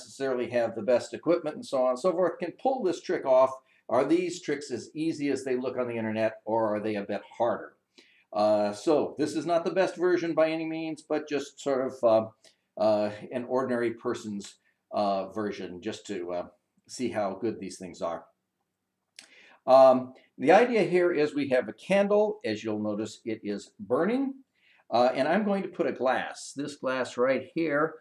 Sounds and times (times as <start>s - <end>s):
Speech: 0.0s - 18.4s, 19.6s - 28.0s.